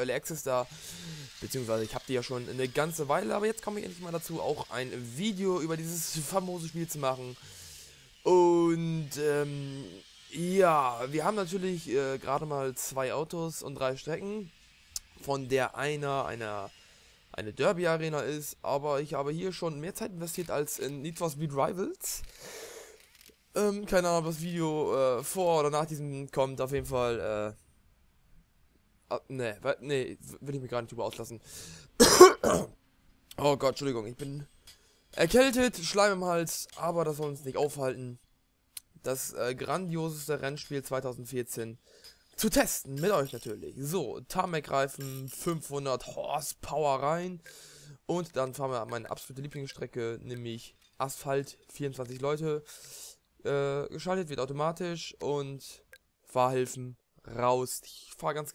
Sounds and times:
Speech: 0:00.0 - 0:07.4, 0:08.2 - 0:16.7, 0:17.3 - 0:22.3, 0:23.5 - 0:27.6, 0:29.1 - 0:32.7, 0:33.3 - 0:34.5, 0:35.2 - 0:38.2, 0:38.8 - 0:41.8, 0:42.4 - 0:52.7, 0:53.4 - 0:58.5.

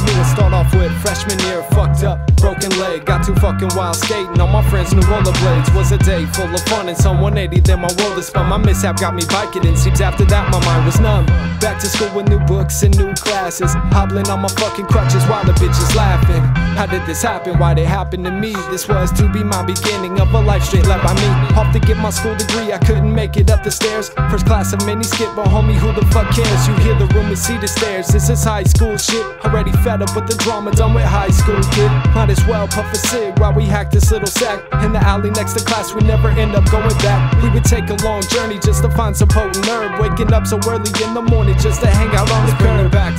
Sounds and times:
Music: 0:00.0 - 0:43.1.

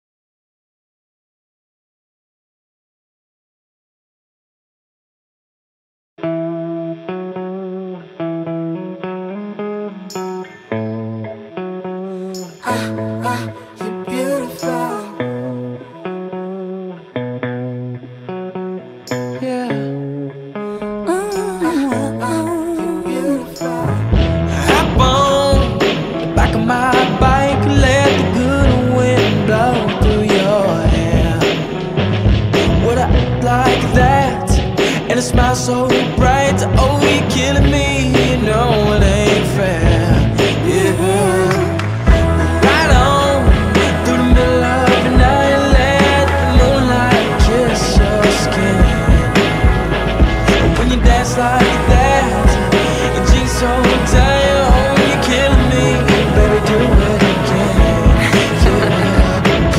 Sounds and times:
Music: 0:06.2 - 0:59.7.

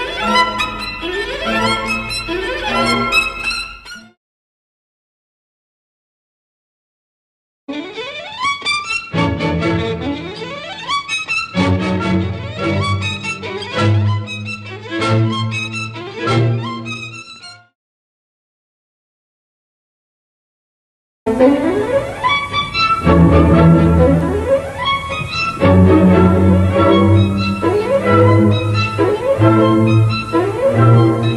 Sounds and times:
Violin, fiddle: 0:00.0 - 0:04.2, 0:07.7 - 0:17.7, 0:21.3 - 0:31.3.

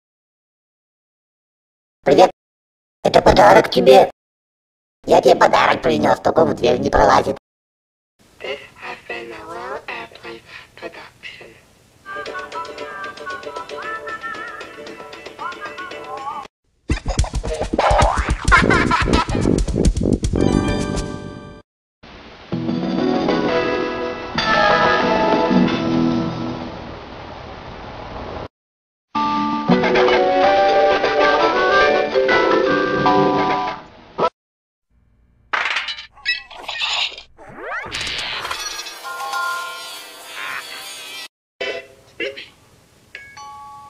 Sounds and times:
Music: 0:12.0 - 0:16.5, 0:20.4 - 0:21.6, 0:22.5 - 0:26.7, 0:29.2 - 0:33.8.

